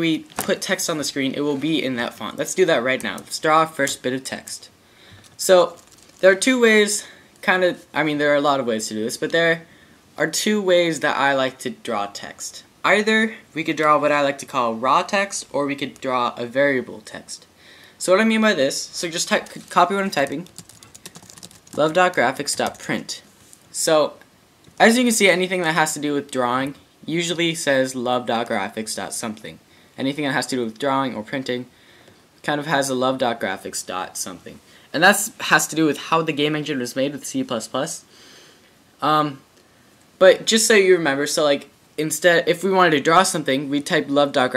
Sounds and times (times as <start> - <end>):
Speech: 0.0 - 4.8, 5.4 - 20.5, 21.8 - 24.2, 24.8 - 31.7, 32.4 - 38.1, 39.0 - 39.5, 40.2 - 44.5
Computer keyboard: 19.4 - 22.9.